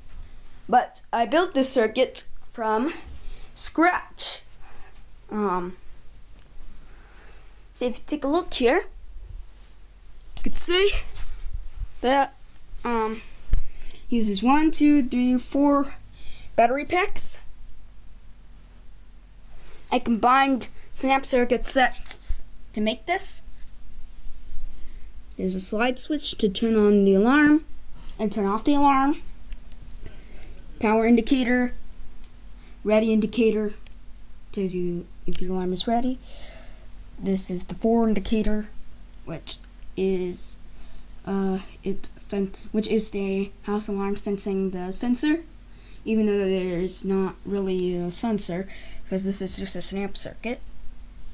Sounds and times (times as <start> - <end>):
Speech: 0.7 - 4.5, 5.3 - 5.8, 7.8 - 8.9, 10.4 - 11.2, 12.0 - 13.3, 14.1 - 16.0, 16.6 - 17.5, 19.9 - 23.5, 25.4 - 29.2, 30.8 - 31.8, 32.8 - 33.8, 34.5 - 36.2, 37.2 - 40.6, 41.2 - 45.5, 46.1 - 50.6.